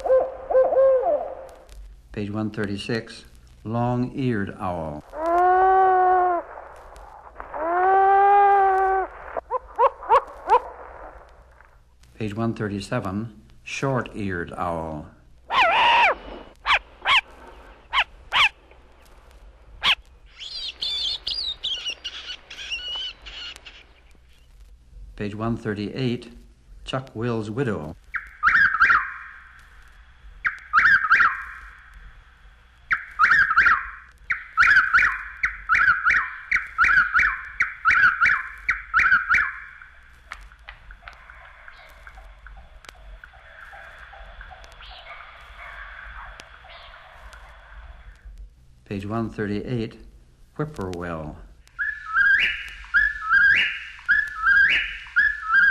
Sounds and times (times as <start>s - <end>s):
Speech: 2.1s - 5.1s, 12.2s - 15.2s, 25.2s - 28.0s, 48.9s - 51.5s
Bird vocalization, bird call, bird song: 19.8s - 24.5s, 28.1s - 29.5s, 30.4s - 31.8s, 32.9s - 39.9s, 40.9s - 47.4s, 51.8s - 55.7s.